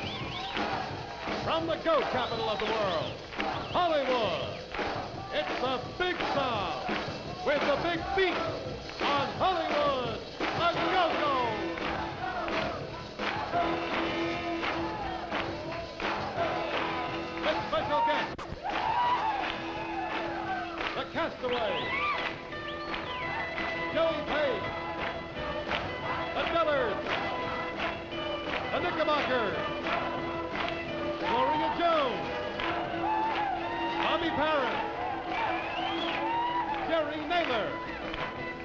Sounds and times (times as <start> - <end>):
Music: 0.0 - 38.6
Speech: 1.4 - 4.6, 5.2 - 11.7, 21.0 - 21.9, 26.4 - 27.1, 28.7 - 29.7, 31.2 - 32.2, 34.0 - 34.9, 36.8 - 37.9.